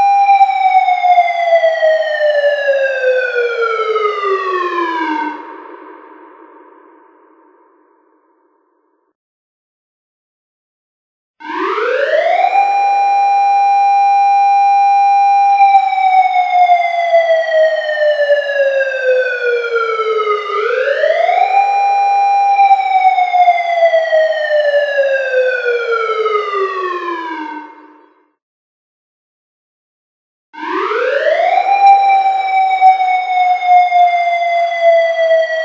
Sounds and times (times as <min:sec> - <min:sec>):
Siren: 0:00.0 - 0:08.7, 0:11.4 - 0:28.4, 0:30.6 - 0:35.6.